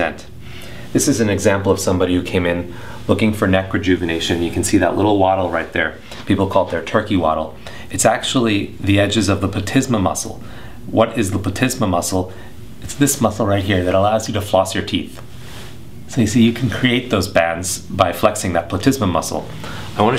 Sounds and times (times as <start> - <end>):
Speech: 0.0 - 0.3, 0.9 - 15.2, 16.1 - 20.1.